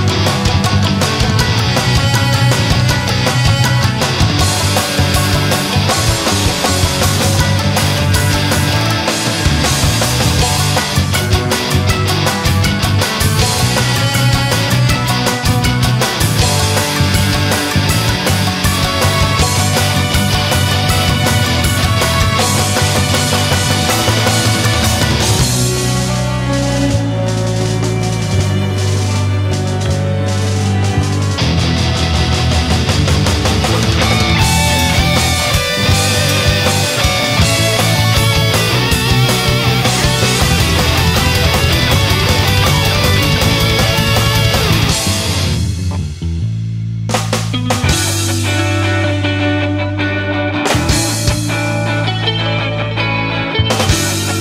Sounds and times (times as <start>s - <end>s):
Angry music: 0.0s - 54.4s.